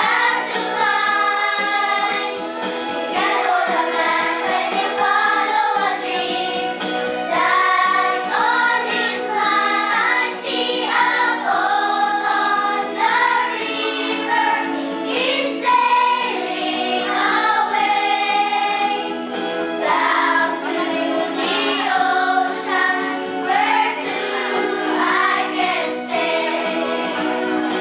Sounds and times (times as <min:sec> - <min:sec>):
Choir: 0:00.0 - 0:27.8.